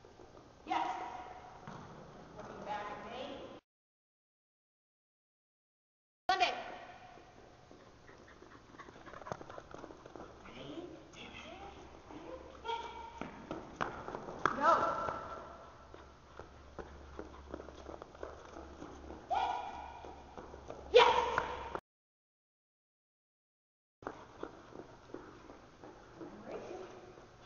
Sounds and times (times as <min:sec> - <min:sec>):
Inside, large room or hall: 0:00.0 - 0:03.6, 0:06.3 - 0:21.8, 0:24.1 - 0:27.4
Speech: 0:02.4 - 0:03.6, 0:10.4 - 0:12.9, 0:26.2 - 0:27.0
Run: 0:07.2 - 0:10.6, 0:13.1 - 0:21.8, 0:24.0 - 0:27.4.